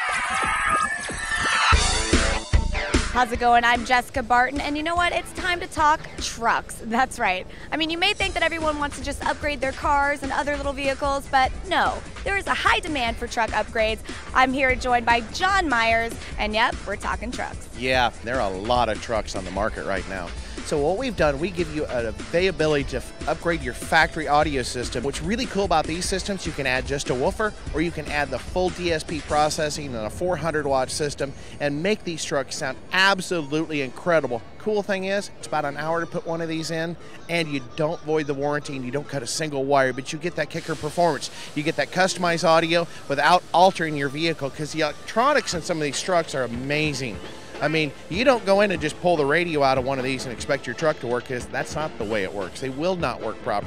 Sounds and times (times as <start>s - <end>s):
Music: 0.0s - 53.6s
Speech: 3.2s - 53.6s.